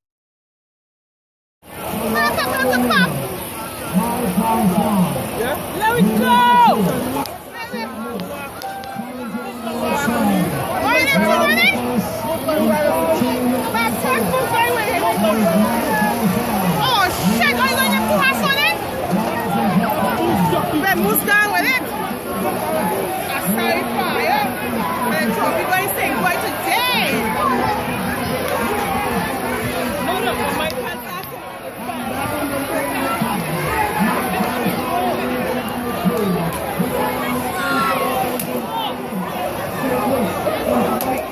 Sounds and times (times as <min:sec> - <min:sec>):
Speech: 0:01.7 - 0:41.3.